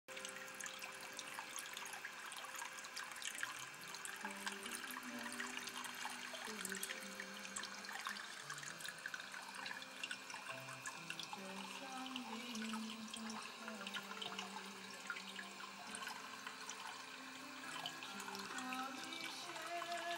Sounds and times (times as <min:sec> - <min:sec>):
Music: 0:00.1 - 0:20.1
Water: 0:00.1 - 0:20.1.